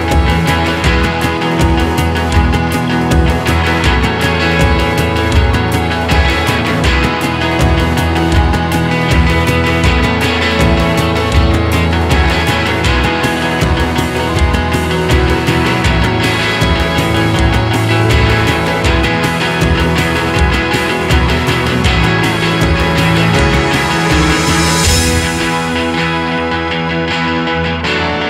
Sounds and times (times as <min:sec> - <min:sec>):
Music: 0:00.0 - 0:28.2.